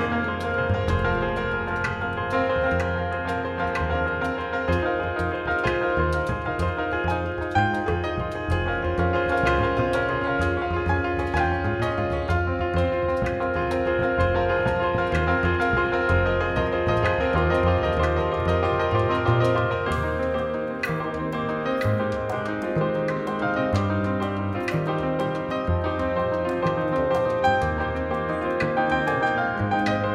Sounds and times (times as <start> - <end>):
Music: 0.0 - 30.1.